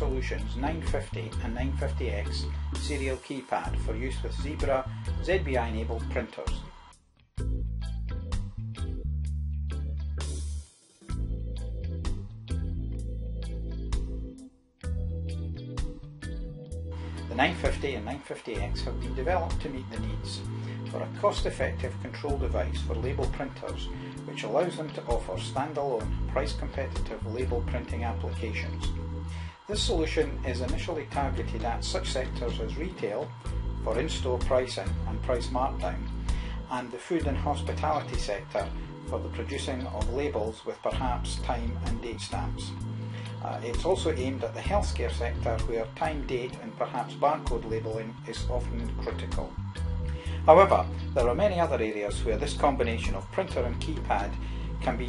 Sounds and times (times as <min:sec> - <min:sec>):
Speech: 0:00.0 - 0:06.7, 0:17.3 - 0:28.9, 0:29.6 - 0:42.8, 0:43.4 - 0:49.5, 0:50.4 - 0:55.0
Music: 0:00.0 - 0:55.0.